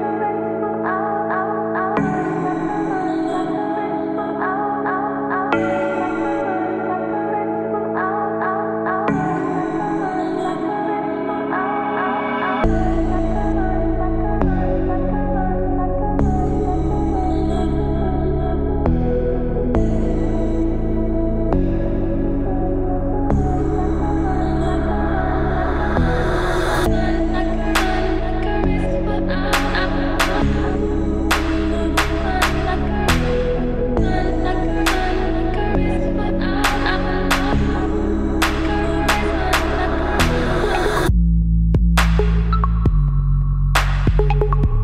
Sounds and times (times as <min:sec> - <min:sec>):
Music: 0:00.0 - 0:44.8.